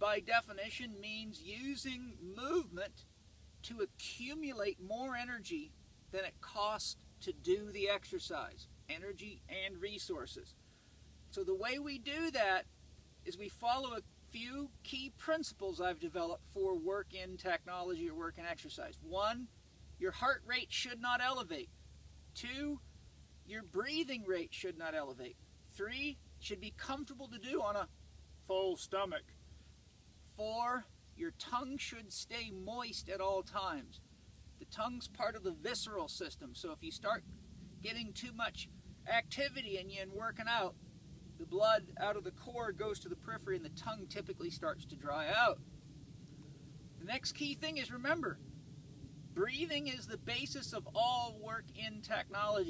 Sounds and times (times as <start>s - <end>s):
Speech: 0.0s - 3.0s, 3.6s - 10.6s, 11.3s - 12.7s, 13.3s - 21.7s, 22.4s - 22.8s, 23.5s - 29.3s, 30.3s - 34.0s, 34.6s - 37.2s, 37.8s - 40.8s, 41.4s - 45.6s, 47.0s - 48.4s, 49.4s - 52.7s.